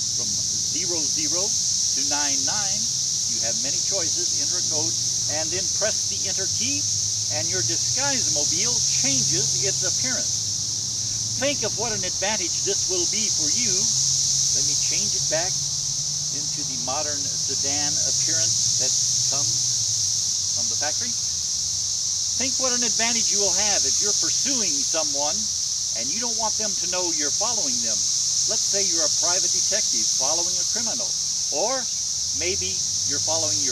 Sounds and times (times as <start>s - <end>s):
Speech: 0.2s - 10.3s, 11.4s - 14.0s, 14.6s - 15.5s, 16.4s - 19.6s, 20.6s - 21.2s, 22.4s - 33.7s.